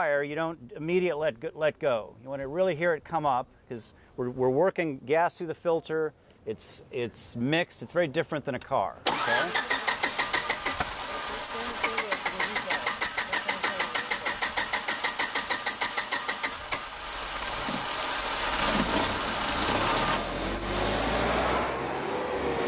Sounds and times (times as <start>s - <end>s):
Speech: 0.0s - 9.6s, 11.3s - 14.2s
Outside, urban or manmade: 0.0s - 22.6s.